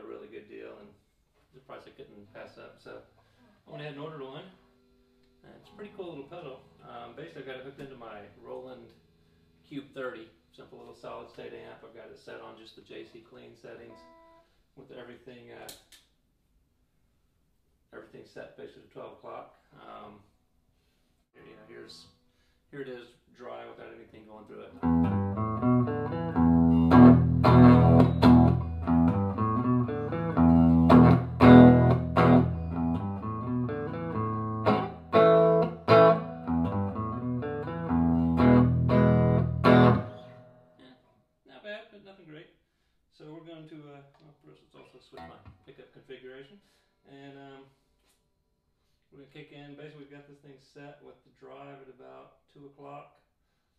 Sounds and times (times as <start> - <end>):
Speech: 0.0 - 4.6, 5.4 - 9.0, 9.6 - 14.1, 14.8 - 15.9, 17.9 - 20.3, 21.4 - 24.8, 40.8 - 47.7, 49.1 - 53.3.